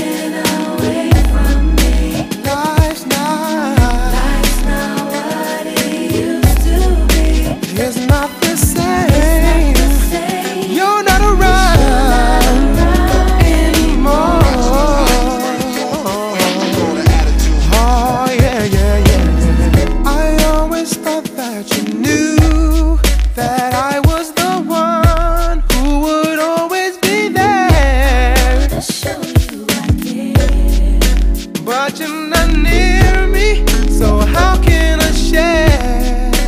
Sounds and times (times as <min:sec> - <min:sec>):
Reggae: 0:00.0 - 0:36.4.